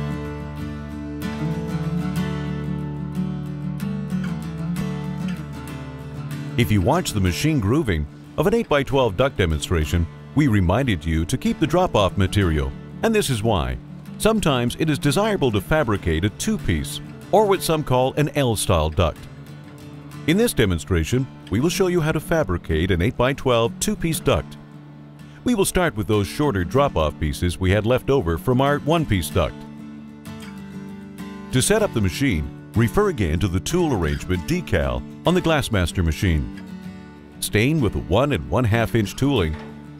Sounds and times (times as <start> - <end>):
Music: 0.0 - 39.9
Speech: 6.6 - 19.3, 20.3 - 24.6, 25.4 - 29.7, 31.5 - 36.6, 37.4 - 39.6.